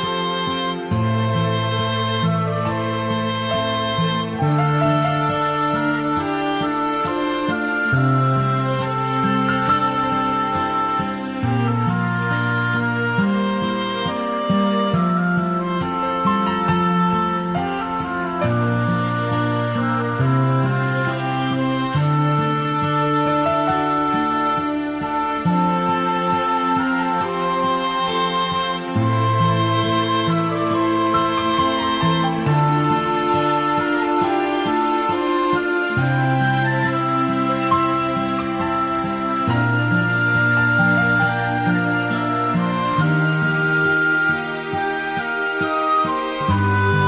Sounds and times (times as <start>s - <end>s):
Sad music: 0.0s - 47.0s.